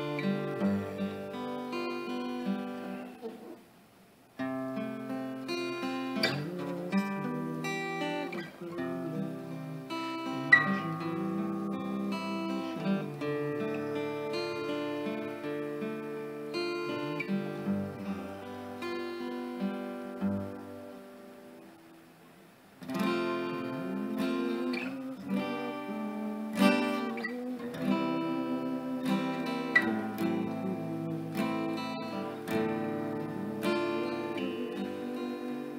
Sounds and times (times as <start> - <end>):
Music: 0.0 - 3.5, 4.4 - 22.0, 22.8 - 35.7.